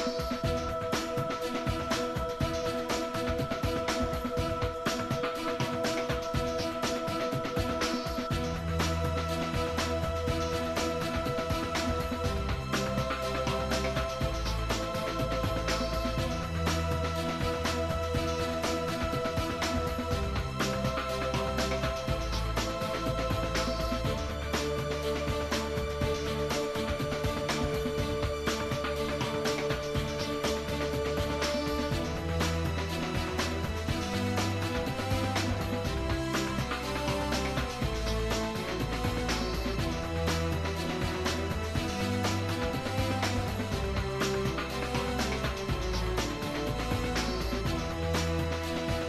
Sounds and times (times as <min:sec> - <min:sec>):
Music: 0:00.0 - 0:49.0.